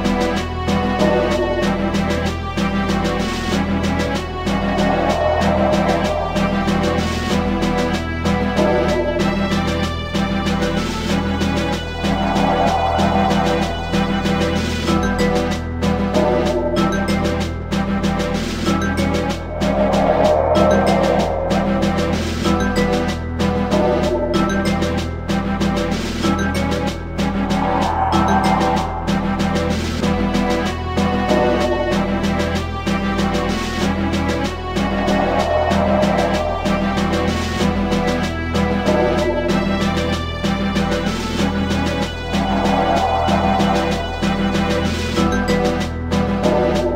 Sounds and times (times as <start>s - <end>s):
Music: 0.0s - 46.9s.